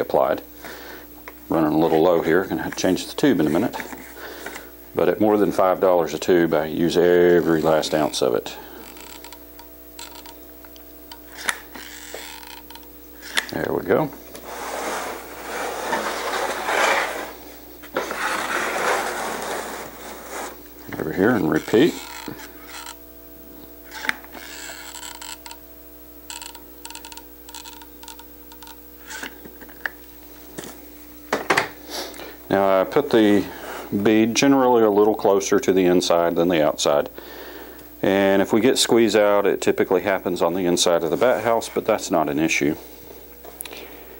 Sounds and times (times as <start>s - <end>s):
Speech: 0.0s - 0.5s, 1.5s - 3.8s, 5.0s - 8.6s, 13.5s - 14.2s, 20.9s - 22.0s, 32.5s - 37.1s, 38.0s - 42.8s.